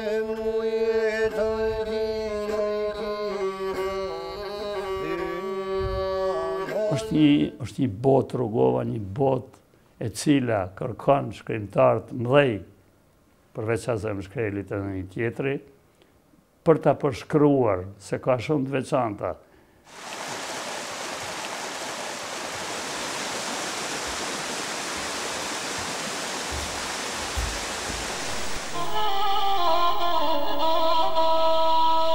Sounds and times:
Stream: 19.9 - 28.8
Waterfall: 19.9 - 29.3
Outside, rural or natural: 19.9 - 32.1
Music: 28.3 - 32.1.

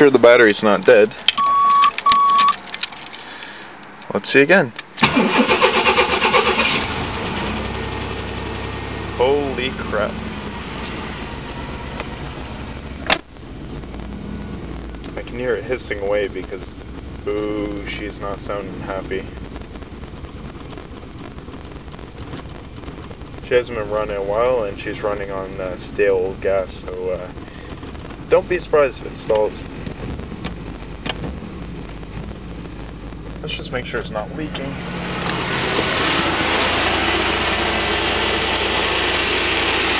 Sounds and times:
Speech: 0.0 - 1.2, 4.1 - 4.8, 9.2 - 10.2, 15.2 - 19.3, 23.4 - 27.3, 28.3 - 29.6, 33.4 - 34.8
Car: 0.0 - 39.9.

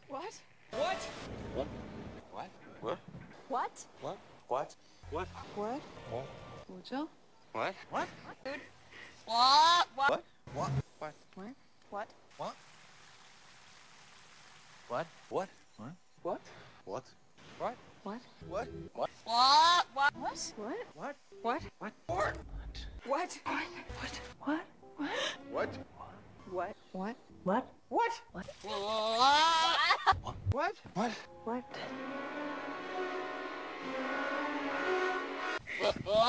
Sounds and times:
Music: 23.4 - 26.2, 31.3 - 35.8.

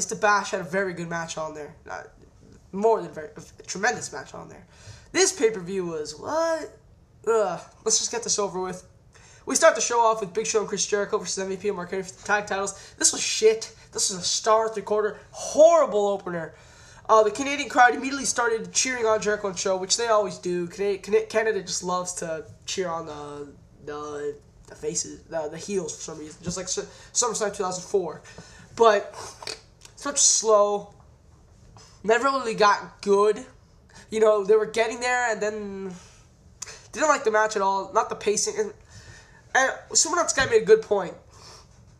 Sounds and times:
Speech: 0.0 - 31.0, 32.0 - 36.0, 36.6 - 38.8, 39.5 - 41.2.

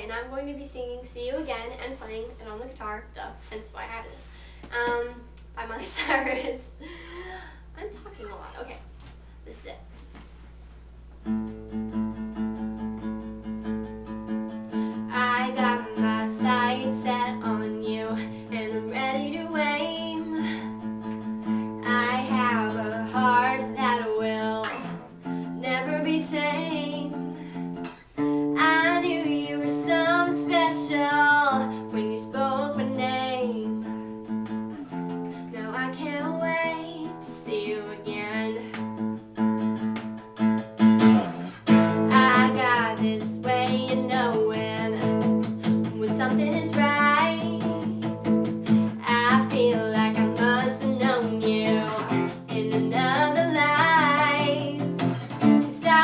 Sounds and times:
Music: 11.2 - 56.0
Female singing: 15.1 - 20.5, 21.8 - 27.2, 28.4 - 33.9, 35.5 - 38.8, 42.0 - 48.0, 48.9 - 56.0.

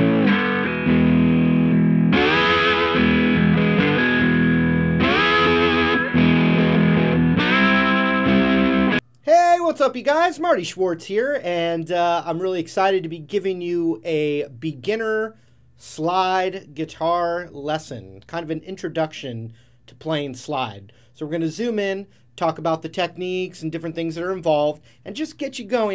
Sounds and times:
Speech: 9.3 - 25.9.

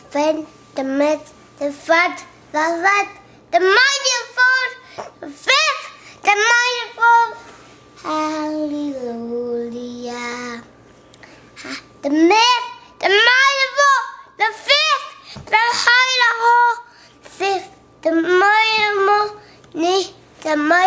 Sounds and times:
Child singing: 12.1 - 16.9.

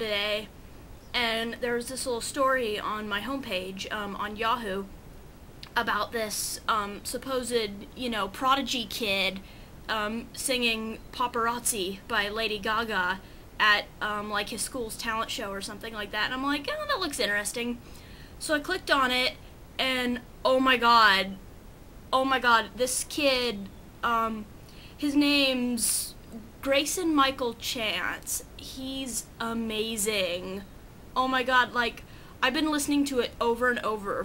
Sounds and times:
Speech: 0.0 - 0.5, 1.1 - 4.9, 5.6 - 17.8, 18.4 - 21.4, 22.2 - 34.2.

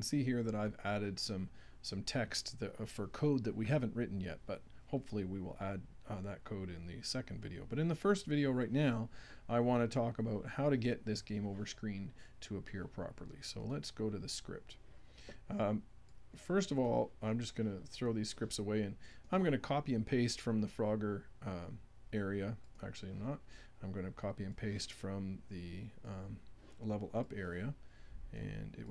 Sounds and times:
Speech: 0.0 - 14.8, 15.5 - 15.8, 16.4 - 28.9.

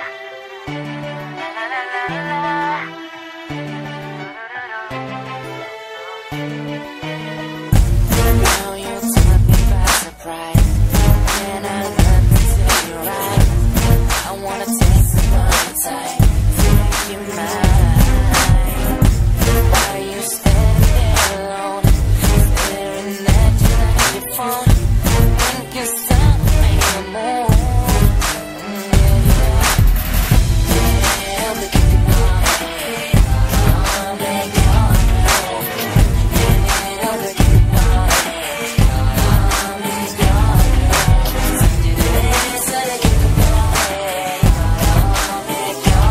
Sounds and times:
Rhythm and blues: 0.0 - 46.1.

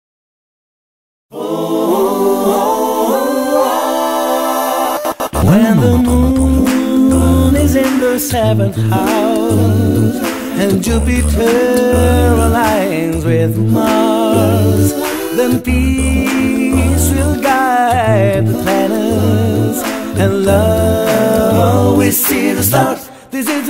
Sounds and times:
Vocal music: 1.3 - 23.6.

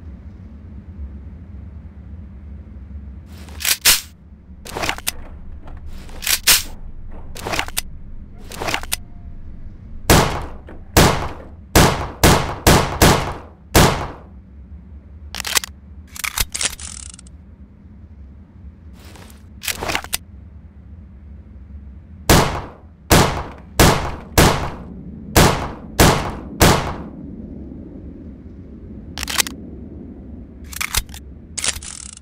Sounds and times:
Gunshot, gunfire: 10.1 - 14.2, 22.3 - 24.8, 25.4 - 27.1.

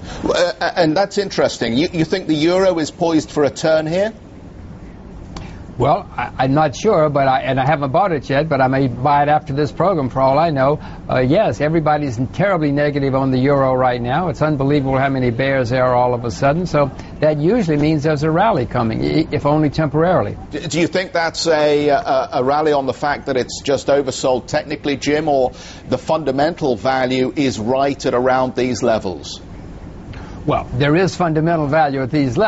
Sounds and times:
Speech: 0.3 - 4.2, 5.8 - 29.4, 30.5 - 32.4.

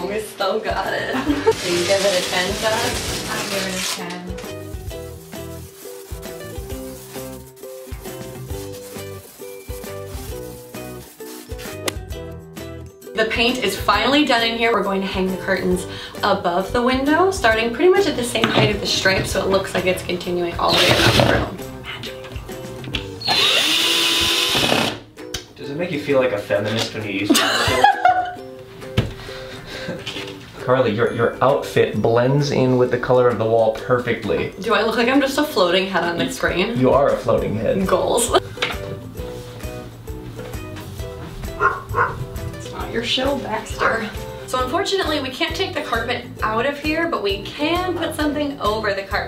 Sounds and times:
Speech: 0.0 - 4.3, 25.6 - 27.3, 30.6 - 38.4, 42.6 - 49.2
Music: 0.0 - 49.2.

